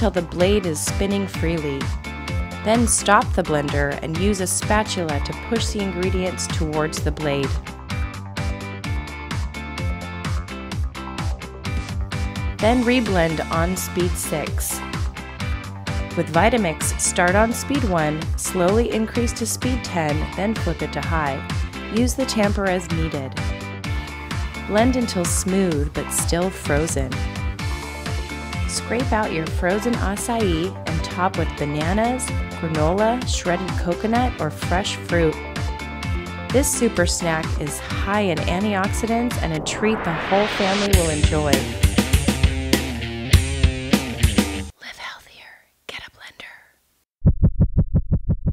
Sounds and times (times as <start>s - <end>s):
Speech: 0.0s - 2.0s, 2.7s - 7.6s, 12.6s - 14.8s, 16.2s - 23.4s, 24.7s - 27.2s, 28.7s - 35.4s, 36.5s - 41.9s
Music: 0.0s - 44.8s.